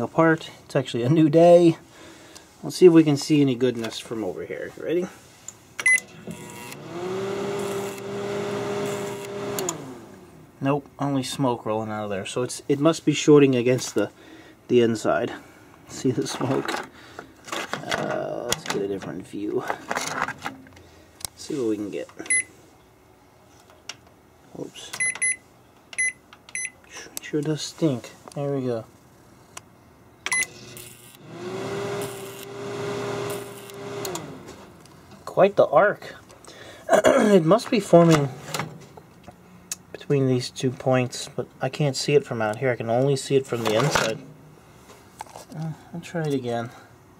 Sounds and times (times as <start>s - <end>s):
Speech: 0.0s - 1.8s, 2.6s - 5.2s, 10.6s - 16.8s, 17.8s - 19.9s, 21.4s - 22.2s, 24.5s - 25.0s, 27.0s - 28.9s, 35.2s - 36.2s, 36.9s - 38.4s, 39.9s - 44.2s, 45.5s - 46.9s.